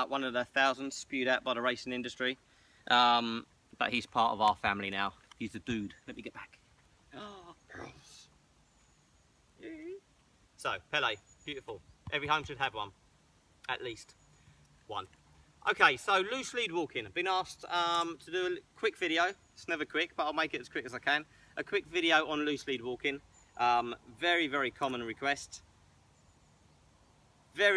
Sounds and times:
Speech: 0.0 - 6.6, 9.6 - 10.0, 10.6 - 13.0, 13.7 - 14.2, 14.9 - 25.6, 27.6 - 27.7.

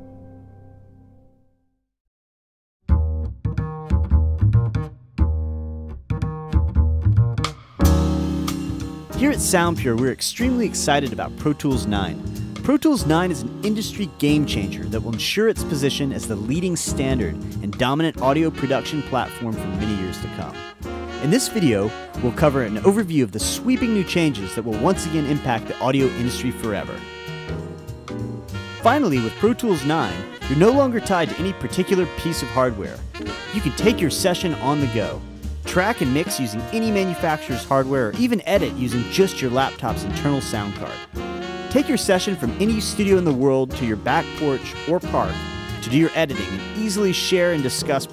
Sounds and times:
Music: 0.0 - 2.0, 2.8 - 48.1
Speech: 9.2 - 20.6, 21.2 - 27.0, 28.8 - 41.1, 41.7 - 48.1.

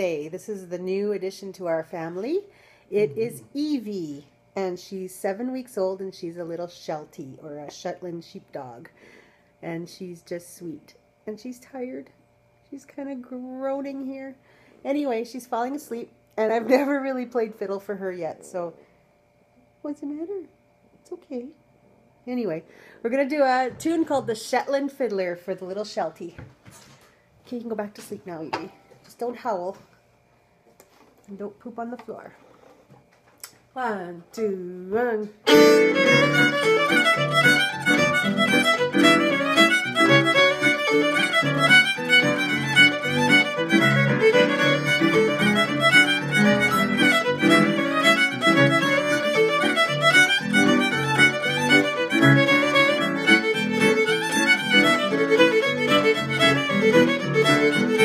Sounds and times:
Speech: 0.0 - 8.9, 9.6 - 18.8, 19.8 - 21.6, 22.3 - 26.4, 27.5 - 29.8, 31.3 - 32.4, 33.8 - 35.4.

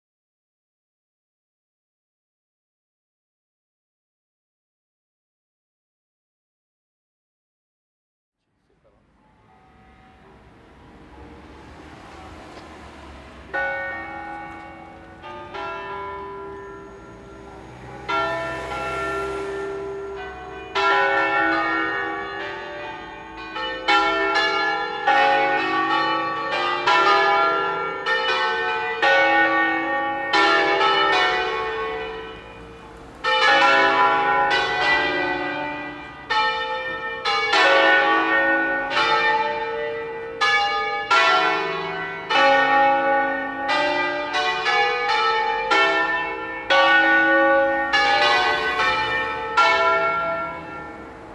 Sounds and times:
Church bell: 9.0 - 51.3.

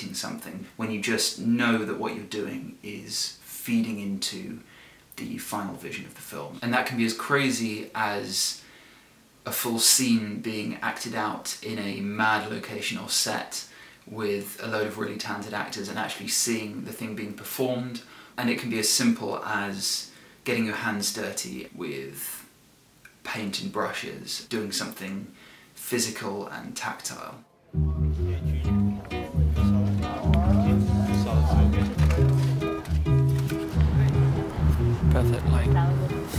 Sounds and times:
Speech: 0.0 - 8.6, 9.4 - 22.5, 23.2 - 27.5, 29.8 - 32.3, 35.0 - 36.3.

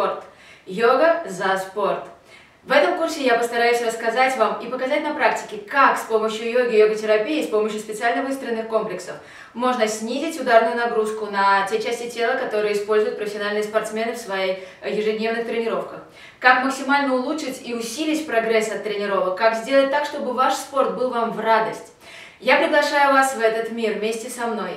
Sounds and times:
Inside, small room: 0.0 - 24.7
Speech: 0.0 - 24.7.

